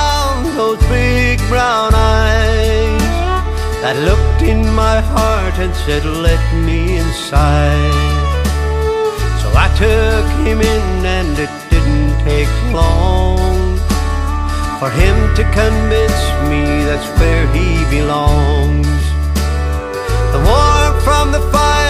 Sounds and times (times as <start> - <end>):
Country: 0.0 - 21.9.